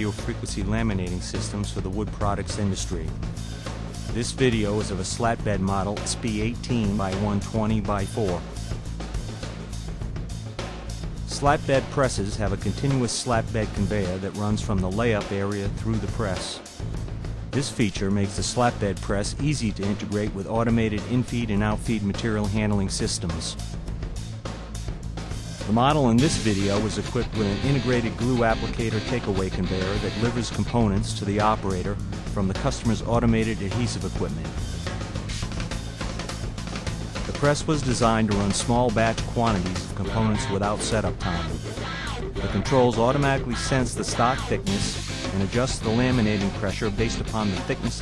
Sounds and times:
Speech: 0.0s - 3.2s, 4.2s - 8.5s, 11.3s - 16.7s, 17.6s - 23.6s, 25.7s - 34.6s, 37.3s - 41.6s, 42.4s - 48.0s
Music: 0.0s - 48.0s.

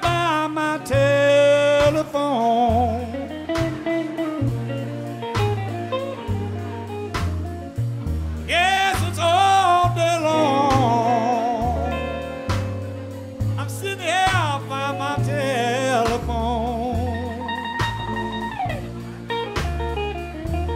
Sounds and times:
Blues: 0.0s - 20.7s.

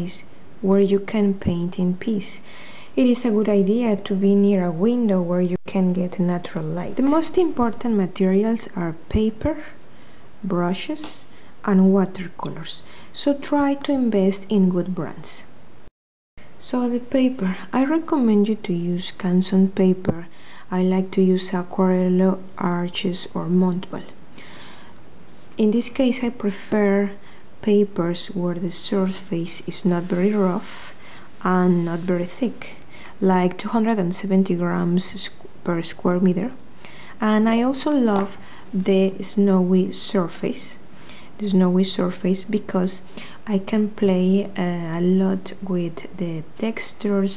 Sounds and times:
Speech: 0.0s - 9.8s, 10.4s - 15.5s, 16.6s - 24.2s, 25.6s - 36.6s, 37.2s - 40.8s, 41.4s - 47.3s.

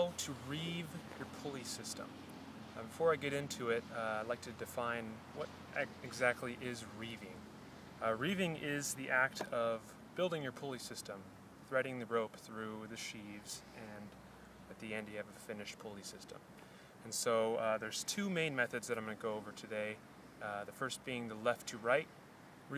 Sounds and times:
Speech: 0.0s - 2.1s, 2.8s - 7.4s, 8.0s - 16.4s, 17.0s - 22.1s.

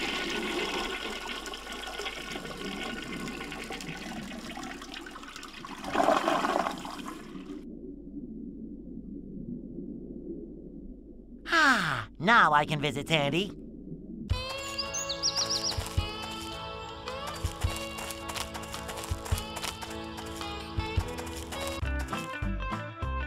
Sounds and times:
Liquid: 0.0s - 7.7s
Speech: 11.5s - 13.6s
Music: 14.3s - 23.2s.

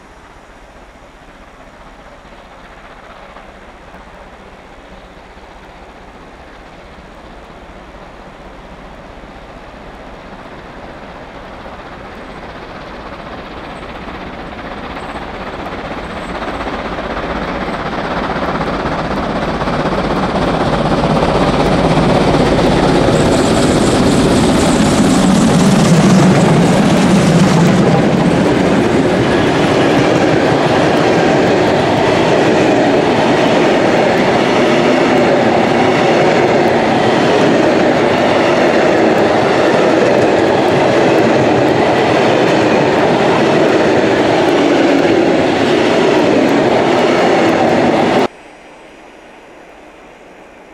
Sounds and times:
Train: 0.0s - 50.7s
Helicopter: 10.3s - 48.3s.

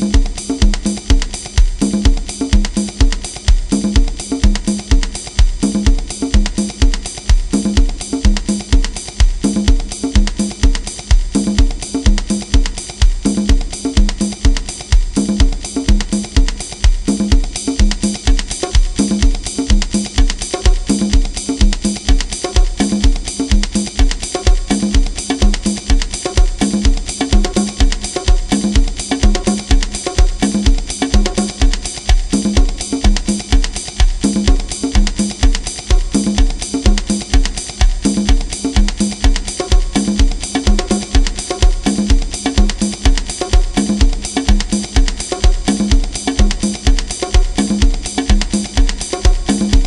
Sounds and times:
Bass drum: 0.0s - 49.8s.

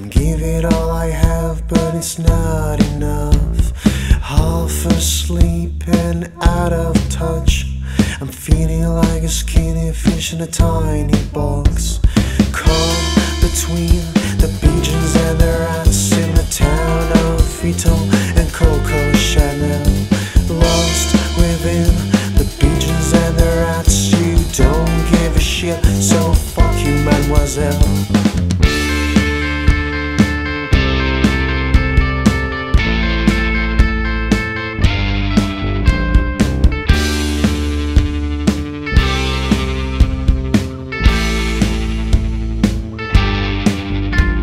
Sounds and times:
Music: 0.0s - 44.4s.

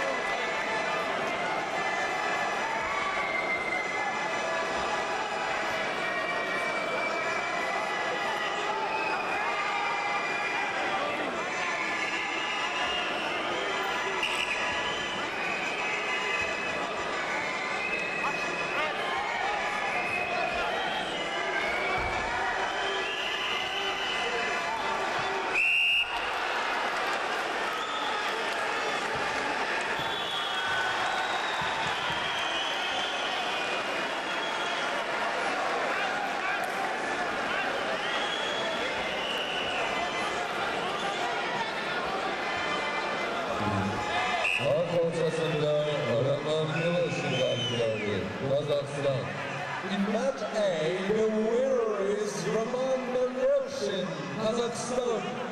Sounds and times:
Inside, large room or hall: 0.0s - 55.5s.

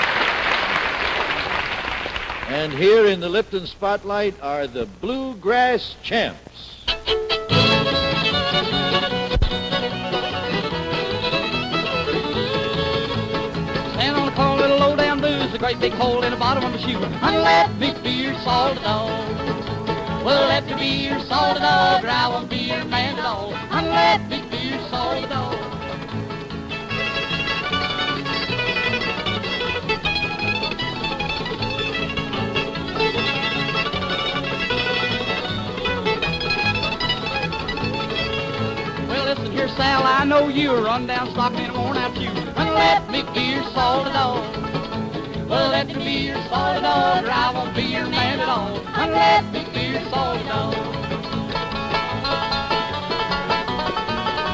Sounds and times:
Bluegrass: 0.0s - 54.5s.

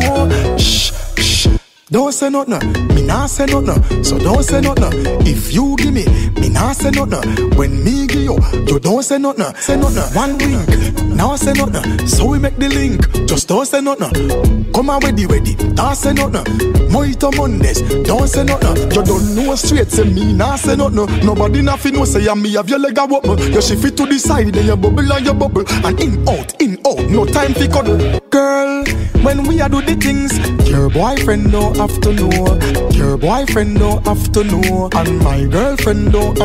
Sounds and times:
Music: 0.0s - 36.4s.

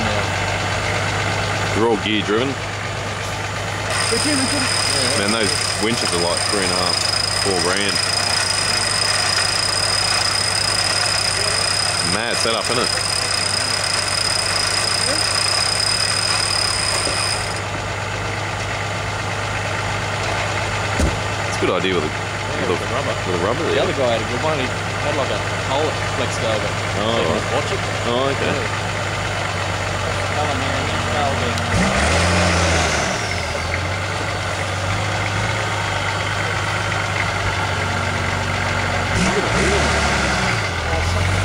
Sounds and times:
Speech: 0.0s - 0.3s, 1.7s - 2.6s, 4.1s - 8.8s, 11.4s - 13.4s, 21.5s - 28.8s, 30.1s - 31.7s, 39.2s - 40.0s, 40.8s - 41.4s
Truck: 0.0s - 41.4s.

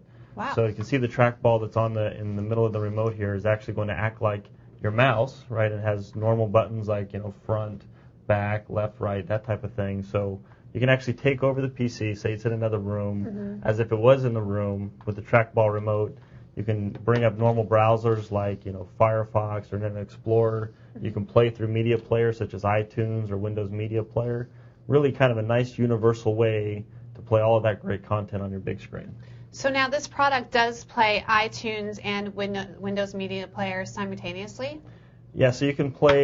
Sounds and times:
Speech: 0.4s - 34.8s, 35.4s - 36.2s.

